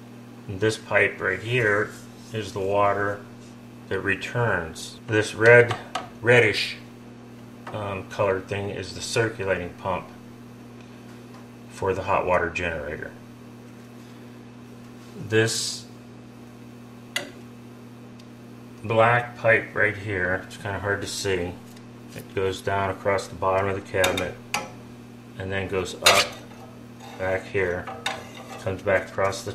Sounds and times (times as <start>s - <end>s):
Speech: 0.5s - 3.3s, 3.9s - 6.9s, 7.7s - 10.2s, 11.7s - 13.2s, 15.2s - 16.0s, 18.8s - 21.6s, 22.2s - 24.4s, 25.4s - 26.4s, 27.2s - 27.9s, 28.6s - 29.5s.